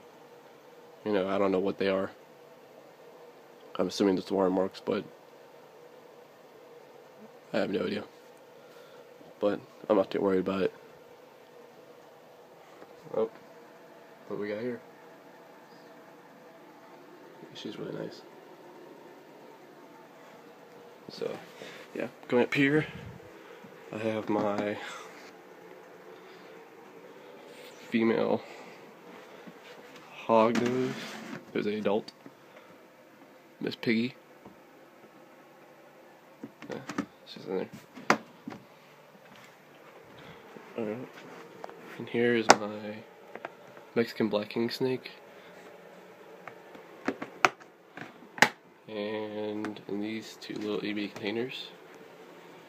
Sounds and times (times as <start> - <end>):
Speech: 1.0 - 2.2, 3.7 - 5.1, 7.5 - 8.2, 9.4 - 10.8, 13.0 - 13.4, 14.2 - 14.9, 17.4 - 18.3, 21.1 - 23.0, 23.9 - 25.0, 27.9 - 28.5, 30.1 - 32.1, 33.6 - 34.2, 36.7 - 37.8, 40.8 - 41.2, 42.0 - 43.1, 43.9 - 45.2, 48.9 - 51.8.